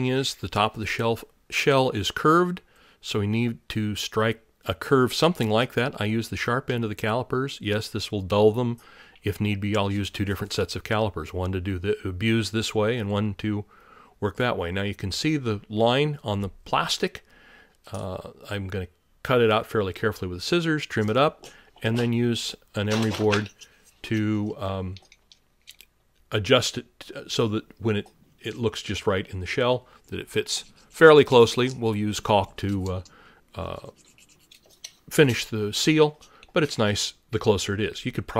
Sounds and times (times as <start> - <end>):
Speech: 0.0 - 17.3, 17.9 - 25.1, 26.3 - 34.0, 35.1 - 38.3.